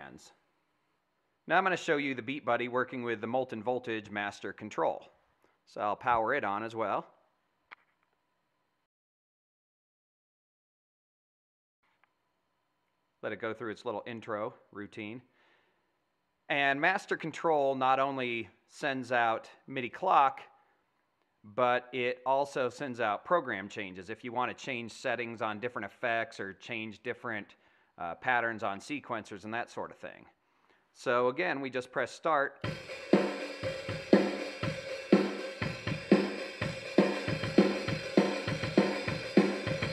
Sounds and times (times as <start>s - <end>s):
Speech: 0.0s - 0.4s, 1.5s - 7.2s, 13.2s - 15.3s, 16.5s - 20.6s, 21.5s - 30.4s, 31.0s - 32.6s.